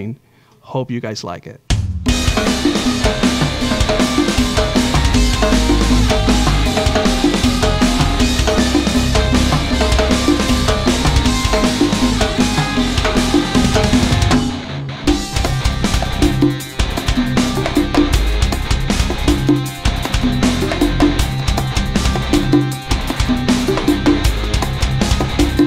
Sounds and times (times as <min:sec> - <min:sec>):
Drum: 0:01.7 - 0:25.6.